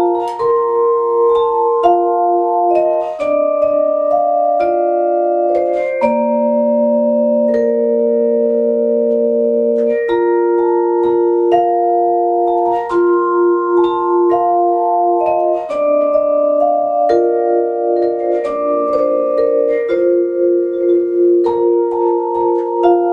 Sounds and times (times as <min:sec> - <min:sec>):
Inside, small room: 0:00.0 - 0:23.1
Vibraphone: 0:00.0 - 0:23.1.